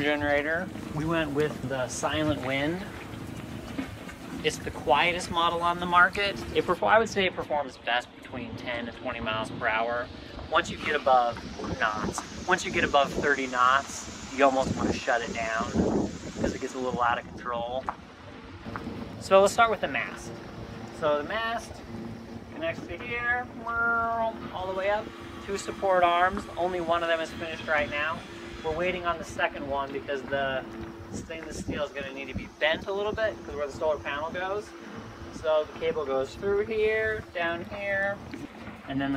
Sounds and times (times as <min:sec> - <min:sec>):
Speech: 0:00.0 - 0:03.0, 0:04.4 - 0:15.8, 0:16.4 - 0:17.9, 0:19.2 - 0:20.3, 0:21.0 - 0:21.8, 0:22.6 - 0:34.7, 0:35.4 - 0:38.2, 0:38.9 - 0:39.1.